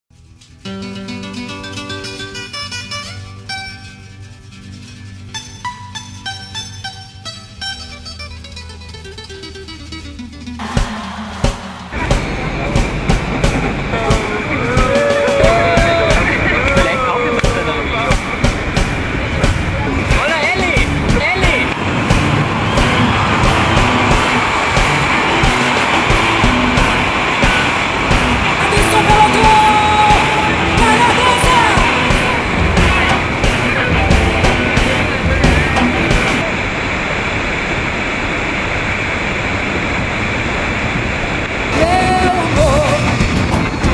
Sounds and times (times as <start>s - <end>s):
Music: 0.1s - 36.5s, 41.8s - 43.9s.